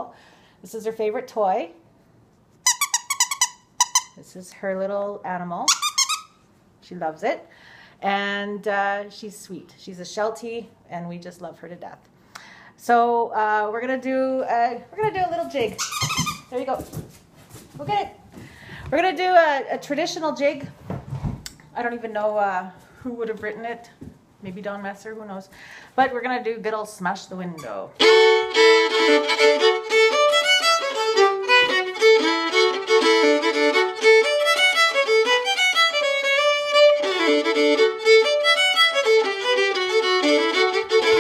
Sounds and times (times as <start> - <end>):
Speech: 0.0 - 1.8, 4.2 - 5.7, 6.8 - 12.1, 12.8 - 15.8, 16.5 - 16.9, 17.8 - 18.2, 18.9 - 20.8, 21.8 - 28.0.